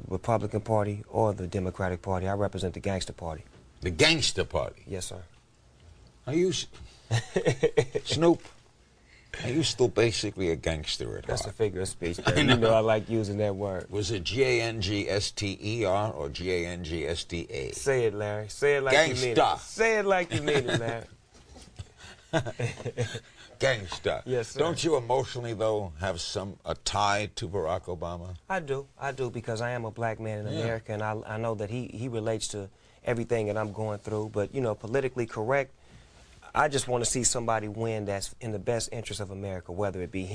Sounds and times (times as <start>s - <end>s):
Speech: 0.0s - 5.3s, 9.3s - 21.1s, 23.6s - 35.7s, 36.5s - 40.3s.